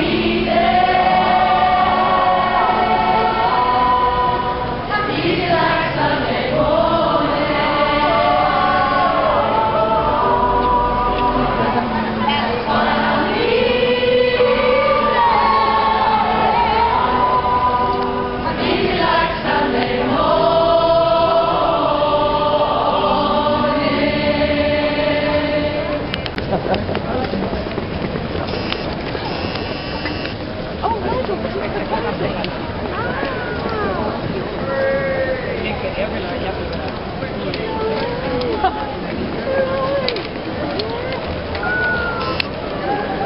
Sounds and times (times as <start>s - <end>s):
Choir: 0.0s - 26.3s
Crowd: 0.0s - 43.2s.